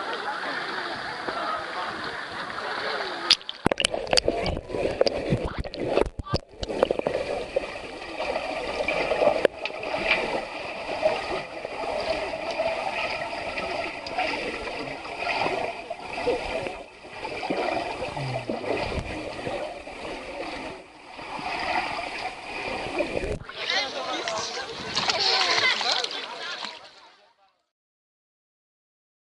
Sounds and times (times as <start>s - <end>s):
Speech: 0.0s - 3.3s, 23.4s - 27.7s
Water: 0.0s - 27.7s
Slosh: 0.4s - 26.9s.